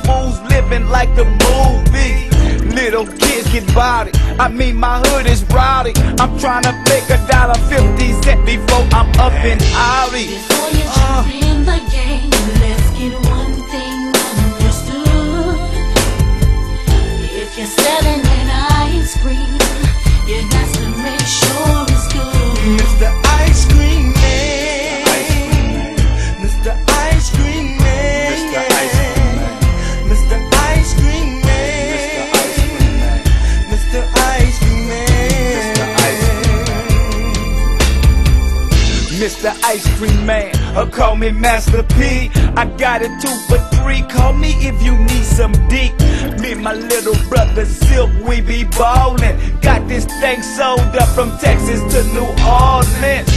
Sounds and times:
Music: 0.0s - 53.3s.

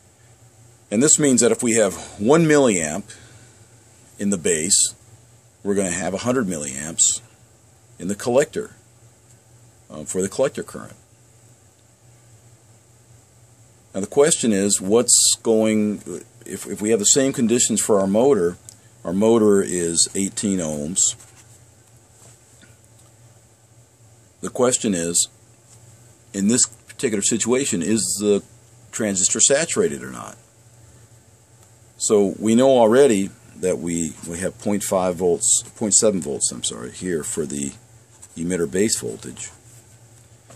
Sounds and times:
Speech: 0.9s - 3.2s, 4.2s - 5.0s, 5.6s - 7.3s, 8.0s - 8.8s, 9.9s - 11.0s, 13.9s - 21.2s, 24.4s - 25.4s, 26.3s - 30.5s, 32.0s - 39.6s.

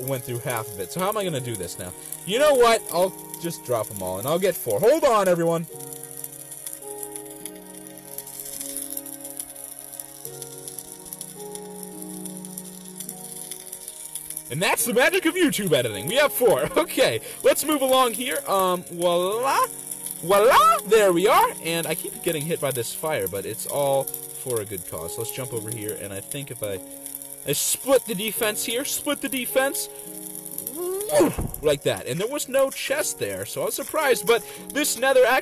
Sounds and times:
Speech: 0.0s - 5.7s, 14.5s - 26.8s, 27.5s - 29.9s, 30.7s - 35.4s
Music: 0.0s - 35.4s.

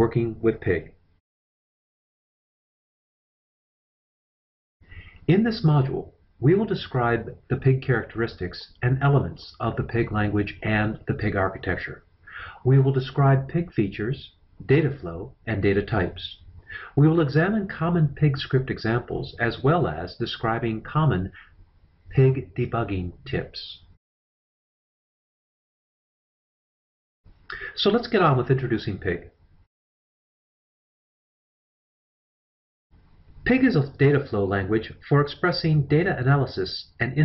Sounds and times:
Speech: 0.0s - 1.0s, 5.2s - 21.5s, 22.1s - 24.0s, 27.5s - 29.4s, 33.4s - 37.2s.

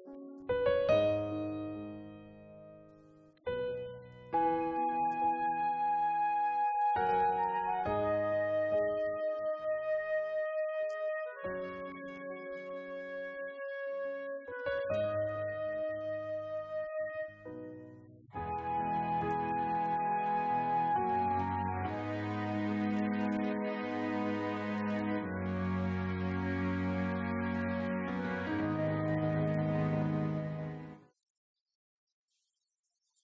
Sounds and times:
Wind instrument, woodwind instrument: 4.3s - 17.8s, 18.4s - 31.0s.

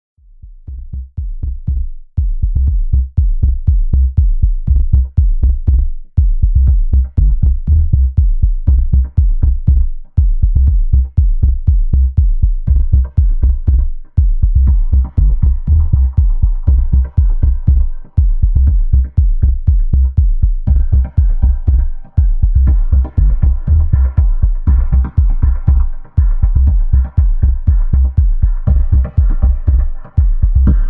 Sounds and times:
Drum machine: 0.3s - 30.8s.

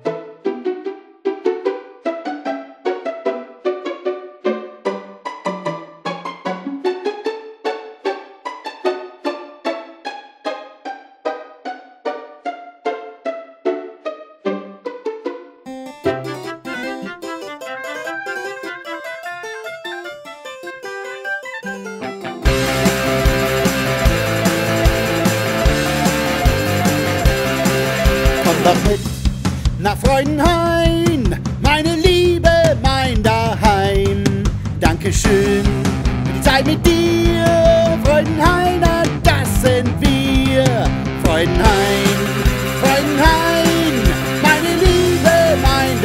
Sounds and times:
Music: 0.0s - 46.0s.

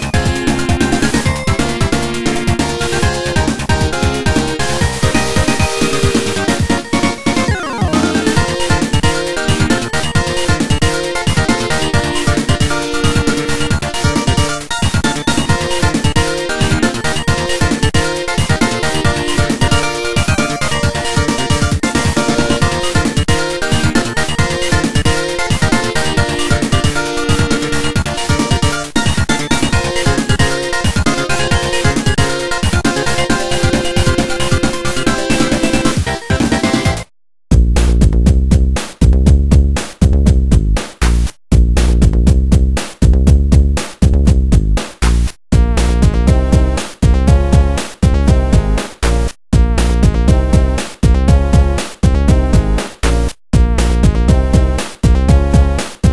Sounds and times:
Music: 0.0s - 56.1s.

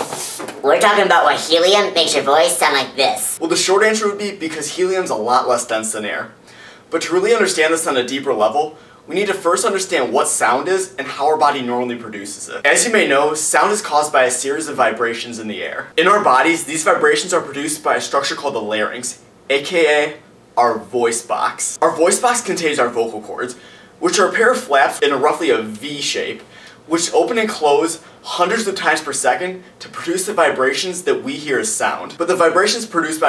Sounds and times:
Speech: 0.6s - 33.2s.

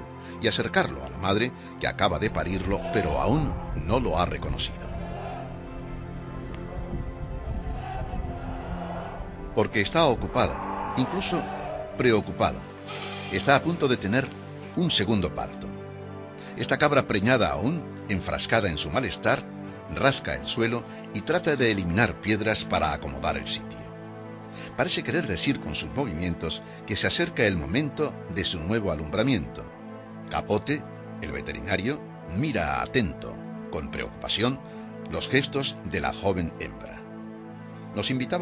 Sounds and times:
Music: 0.0s - 38.4s
Speech: 0.4s - 4.9s, 9.6s - 12.6s, 13.3s - 15.7s, 16.6s - 23.8s, 24.8s - 29.7s, 30.3s - 37.0s, 38.0s - 38.4s.

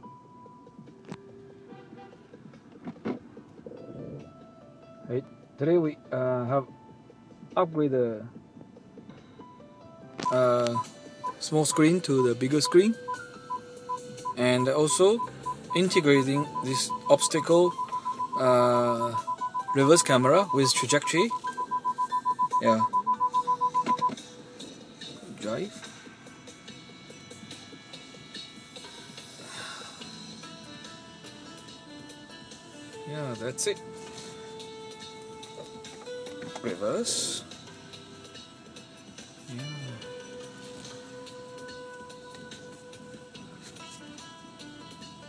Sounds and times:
Music: 0.0s - 45.2s.

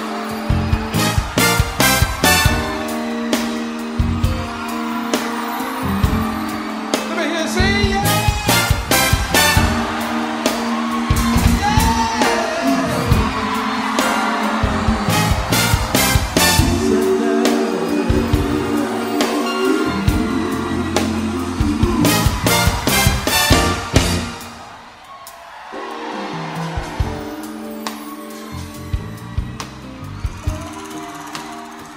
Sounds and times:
Music: 0.0s - 31.9s.

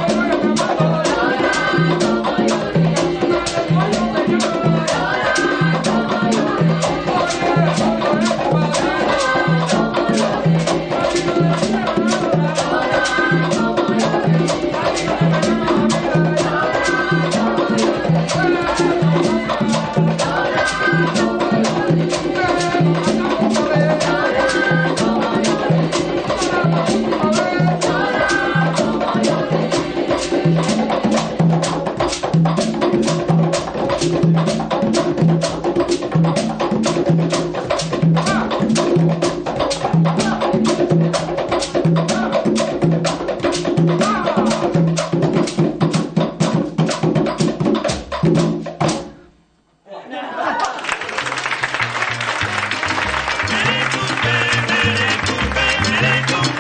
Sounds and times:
Inside, large room or hall: 0.0s - 56.6s.

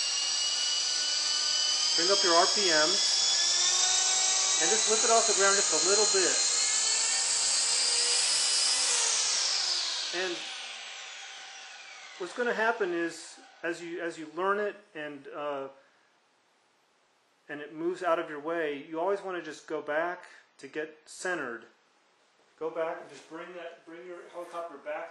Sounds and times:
Helicopter: 0.1s - 2.2s, 3.0s - 7.0s
Speech: 2.0s - 3.0s, 4.6s - 6.4s, 10.2s - 10.4s, 12.2s - 15.8s, 17.5s - 21.7s, 22.6s - 25.1s.

